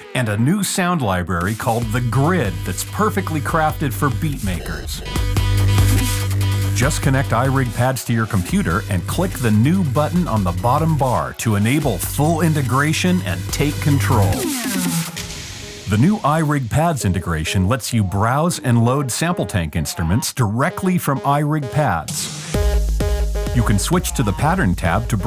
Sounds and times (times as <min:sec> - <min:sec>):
Speech: 0:00.0 - 0:05.2, 0:06.8 - 0:14.5, 0:15.9 - 0:22.1, 0:23.6 - 0:25.2
Music: 0:00.0 - 0:25.2.